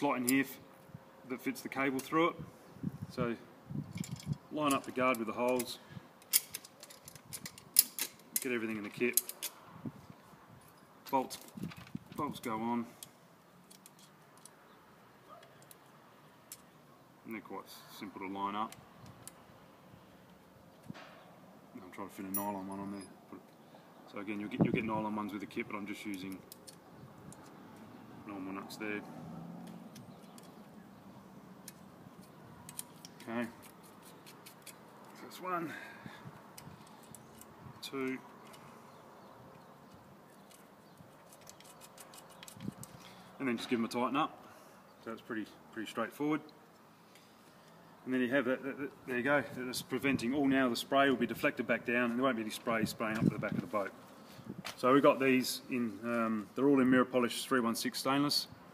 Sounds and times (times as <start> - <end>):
Speech: 1.3 - 2.4, 3.1 - 3.4, 4.6 - 5.8, 8.4 - 9.2, 11.1 - 11.4, 12.2 - 12.9, 17.3 - 18.8, 21.8 - 23.1, 24.1 - 26.4, 28.3 - 29.1, 33.2 - 33.6, 35.2 - 35.8, 37.8 - 38.2, 43.4 - 44.3, 45.0 - 46.5, 48.1 - 54.0, 54.8 - 58.5.